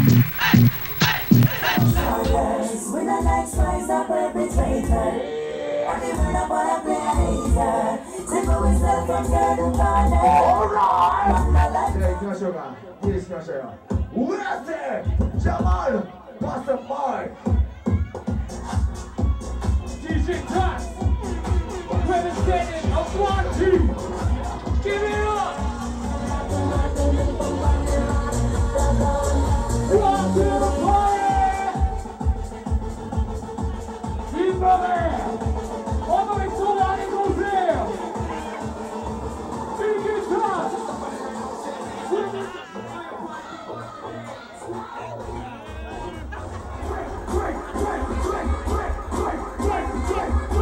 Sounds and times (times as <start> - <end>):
Music: 0.0 - 14.3, 14.9 - 50.6
Crowd: 0.0 - 50.6
Speech: 12.0 - 18.2, 19.8 - 25.6, 34.2 - 35.4, 36.0 - 38.7, 39.8 - 41.0.